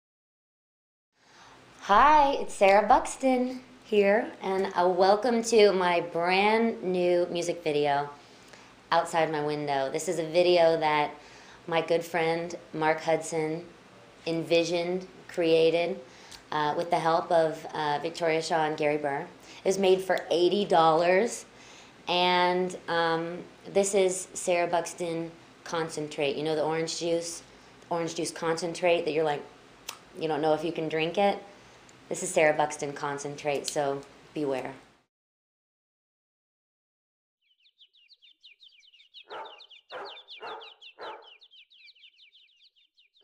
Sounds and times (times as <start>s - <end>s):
Speech: 1.8s - 8.2s, 8.9s - 13.7s, 14.3s - 21.5s, 22.1s - 31.5s, 32.1s - 34.8s.